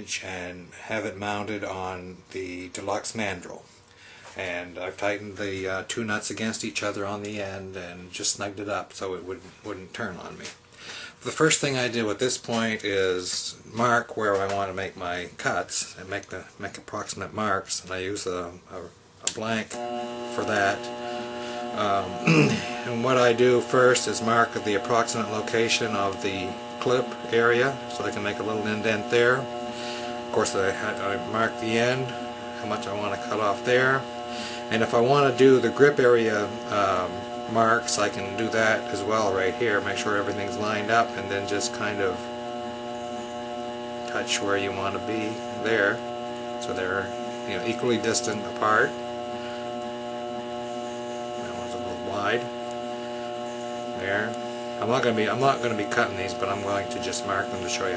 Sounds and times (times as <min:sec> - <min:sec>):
Speech: 0:00.0 - 0:03.7, 0:04.4 - 0:10.6, 0:11.2 - 0:20.9, 0:21.7 - 0:29.6, 0:30.3 - 0:34.1, 0:34.7 - 0:42.3, 0:44.1 - 0:46.0, 0:46.6 - 0:49.0, 0:51.4 - 0:52.6, 0:53.9 - 0:57.9.